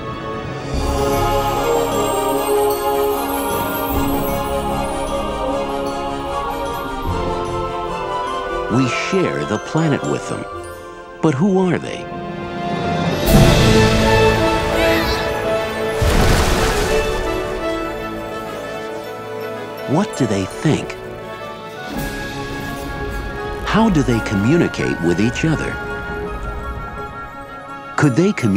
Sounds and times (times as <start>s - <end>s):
Music: 0.0s - 28.5s
Speech: 8.7s - 10.5s, 11.2s - 12.1s, 19.9s - 21.0s, 23.7s - 25.8s, 28.0s - 28.5s.